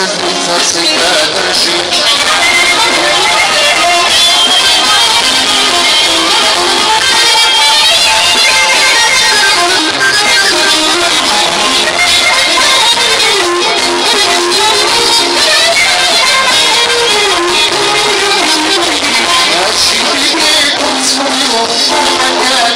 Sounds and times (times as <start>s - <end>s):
Background music: 0.0s - 22.7s.